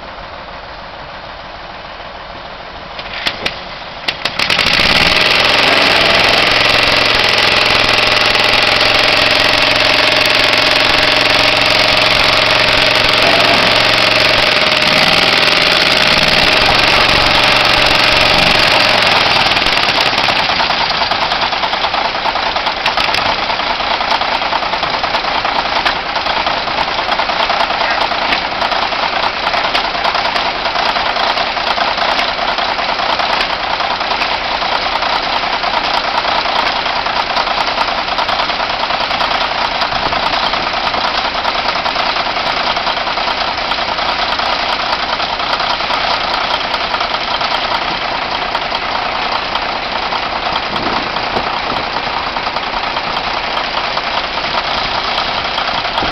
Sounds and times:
Engine: 0.0s - 56.1s
Vehicle: 0.0s - 56.1s.

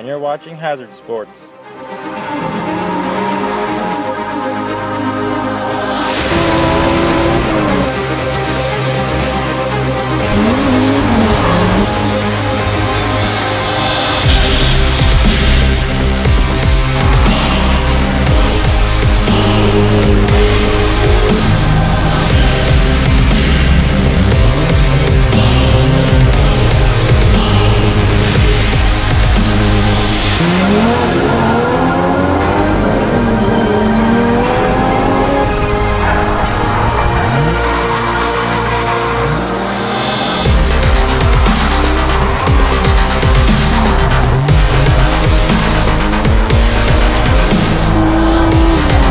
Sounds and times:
Music: 0.0s - 49.1s
Race car, auto racing: 2.0s - 49.1s.

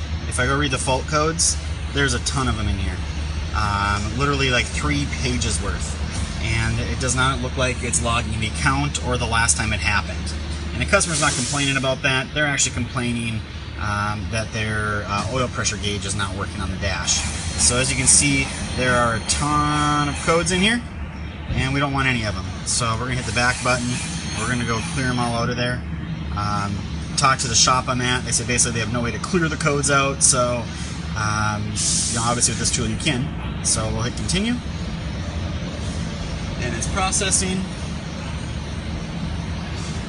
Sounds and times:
Speech: 0.3s - 20.9s, 21.5s - 34.8s, 36.6s - 37.8s.

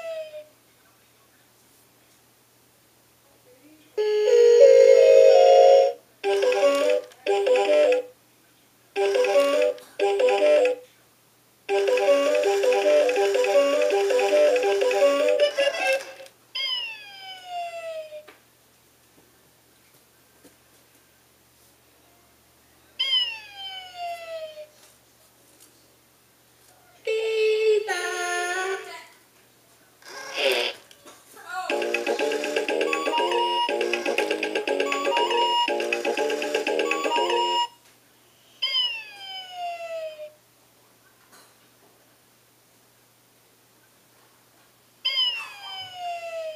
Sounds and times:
Music: 4.3s - 8.1s, 9.0s - 10.8s, 11.7s - 16.1s, 31.7s - 37.7s.

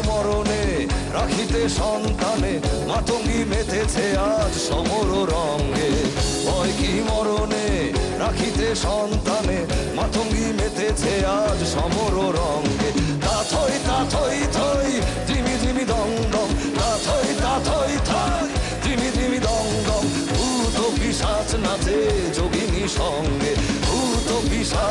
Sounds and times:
Male singing: 0.0s - 24.9s
Music: 0.0s - 24.9s.

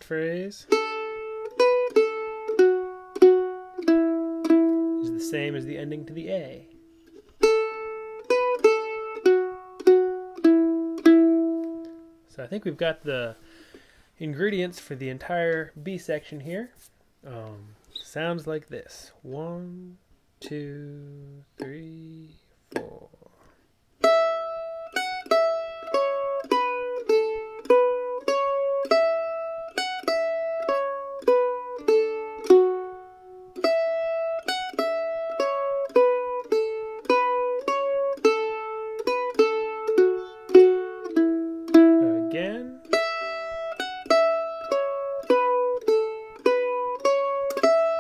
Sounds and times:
Speech: 0.0s - 0.7s, 5.0s - 6.7s, 12.3s - 13.4s, 14.2s - 23.4s, 42.0s - 42.8s.

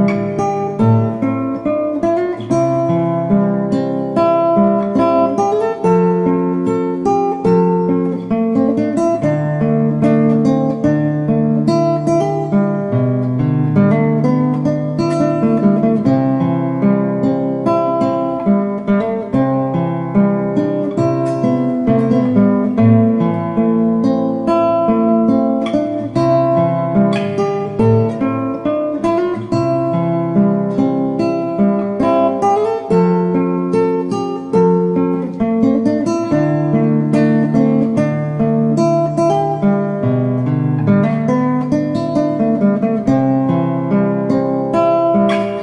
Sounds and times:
Strum: 0.0s - 45.6s.

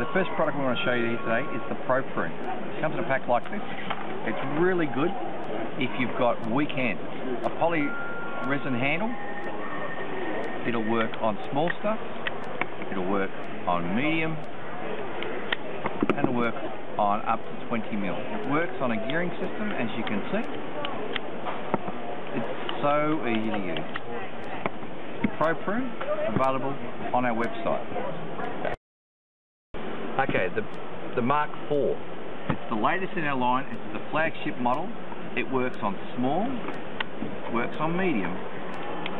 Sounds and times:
Speech: 0.0s - 9.2s, 10.6s - 12.1s, 12.8s - 14.6s, 16.0s - 21.1s, 22.3s - 28.8s, 30.2s - 32.0s, 32.6s - 36.7s, 37.4s - 38.4s.

